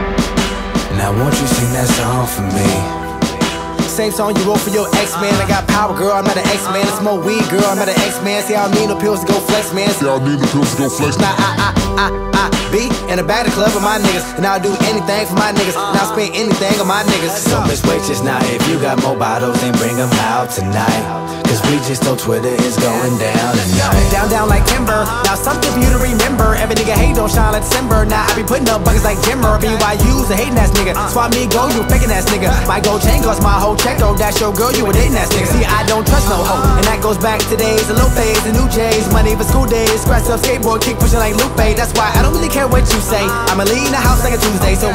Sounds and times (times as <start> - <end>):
Music: 0.0 - 44.9.